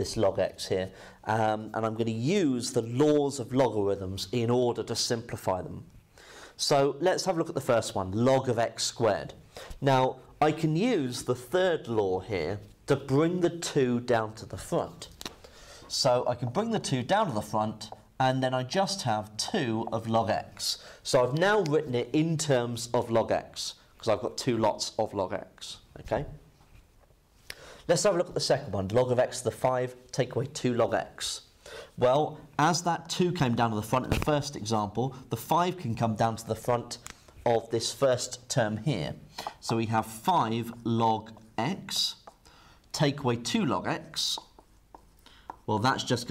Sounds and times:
Speech: 0.0s - 5.9s, 6.6s - 15.2s, 15.9s - 26.4s, 27.9s - 42.3s, 42.9s - 44.6s, 45.7s - 46.3s.

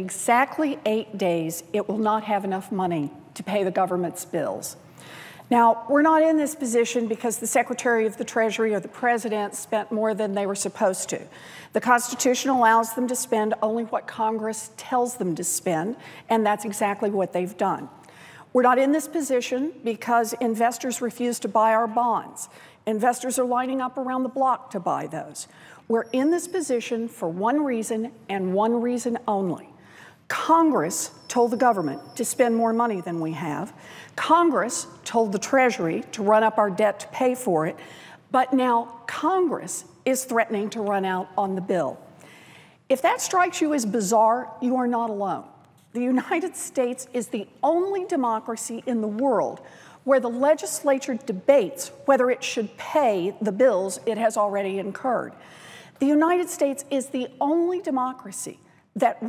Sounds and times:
Narration, monologue: 0.0s - 59.2s
Female speech, woman speaking: 5.5s - 17.9s, 18.6s - 29.6s, 30.3s - 37.7s, 42.9s - 55.3s, 56.0s - 59.2s.

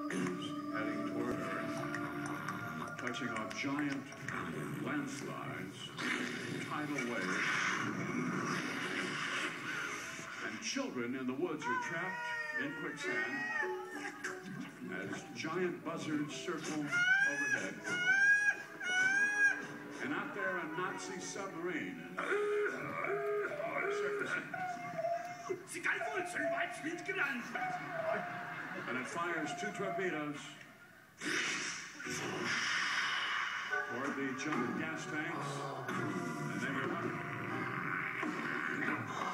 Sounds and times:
Music: 0.0s - 7.2s, 7.8s - 31.0s, 32.0s - 39.3s
Speech: 23.4s - 28.2s, 28.9s - 30.6s.

